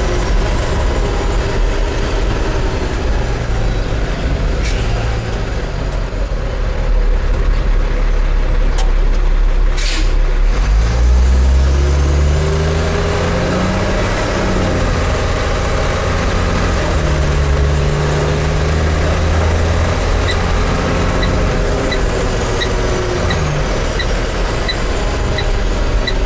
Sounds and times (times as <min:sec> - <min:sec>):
Truck: 0:00.0 - 0:26.2.